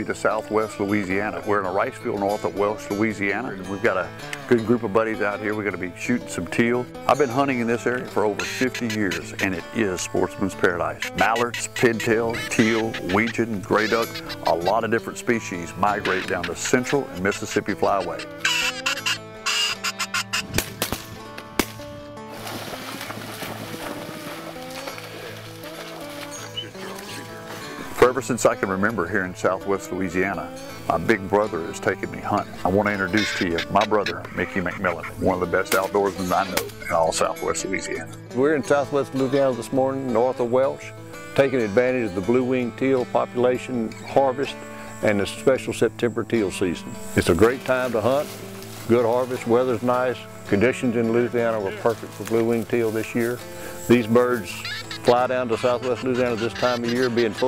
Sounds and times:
Speech: 0.0 - 18.2, 27.9 - 48.3, 48.9 - 57.4
Music: 0.0 - 57.4
Quack: 8.4 - 9.6, 10.9 - 14.9, 15.9 - 17.1, 17.7 - 20.6, 32.9 - 36.8, 54.6 - 57.4.

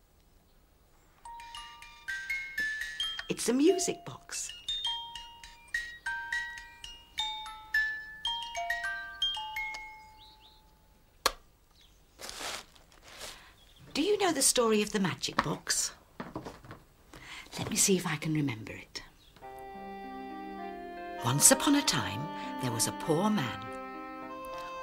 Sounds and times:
Music: 1.3 - 10.4, 19.4 - 24.8
Speech: 3.3 - 4.6, 14.0 - 16.0, 17.5 - 19.1, 21.2 - 23.7.

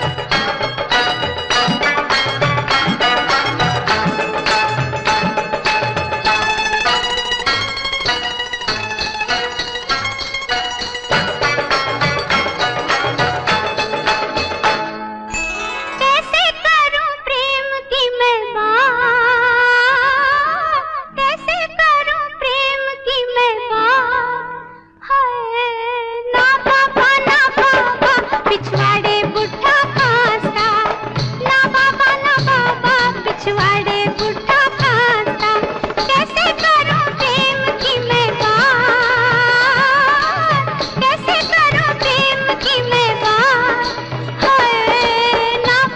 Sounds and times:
Music of Bollywood: 0.0 - 45.9.

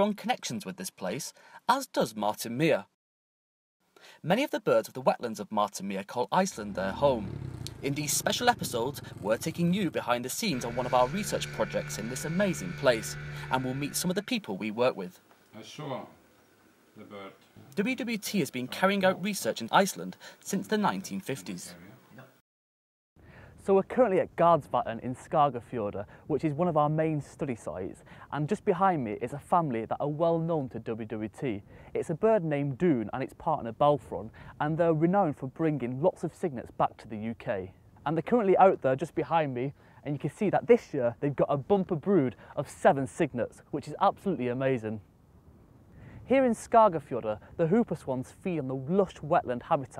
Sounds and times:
Speech: 0.0 - 3.0, 4.2 - 16.2, 17.0 - 22.4, 23.6 - 45.0, 46.3 - 49.9.

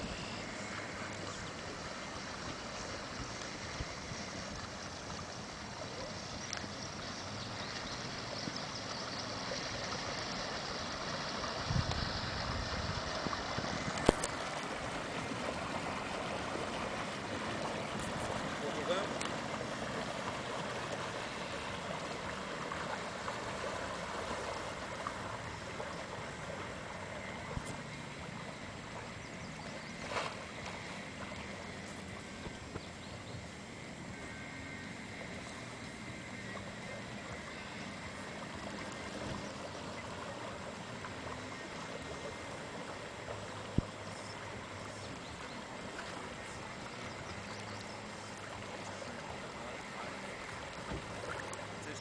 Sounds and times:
Sailboat, sailing ship: 0.0 - 52.0.

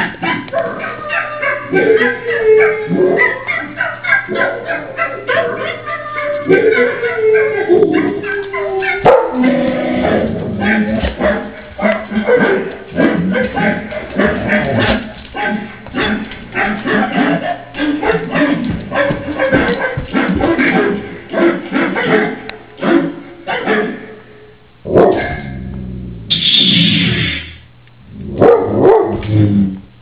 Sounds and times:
Bow-wow: 0.2 - 24.1, 24.9 - 25.6, 28.4 - 29.7.

